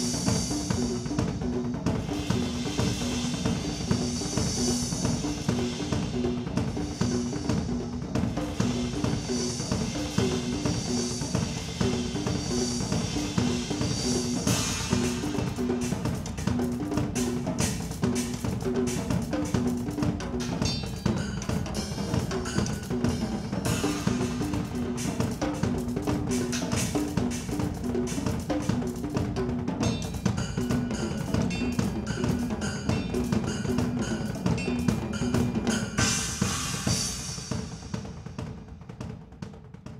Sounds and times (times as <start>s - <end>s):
Cymbal: 0.0s - 39.9s
Drum kit: 0.0s - 39.9s.